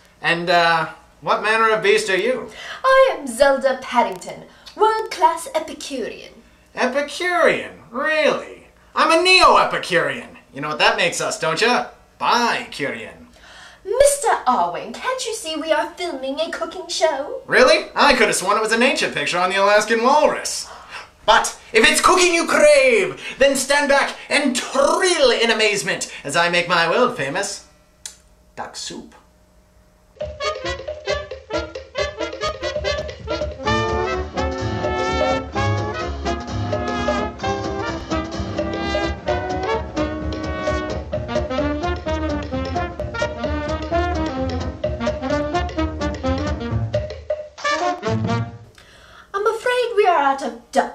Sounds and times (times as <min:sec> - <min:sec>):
Speech: 0:00.2 - 0:13.3, 0:13.9 - 0:20.7, 0:21.3 - 0:27.6, 0:28.6 - 0:29.2, 0:49.3 - 0:50.9.